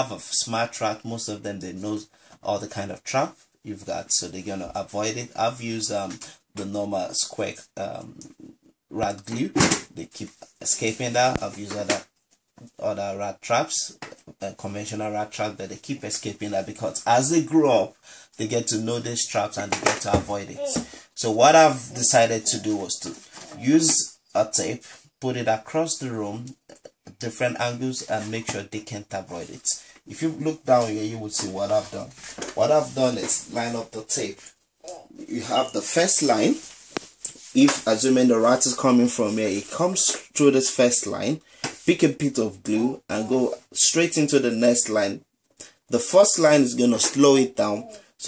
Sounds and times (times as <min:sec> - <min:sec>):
Speech: 0:00.0 - 0:36.7, 0:37.3 - 0:45.3, 0:45.9 - 0:48.2.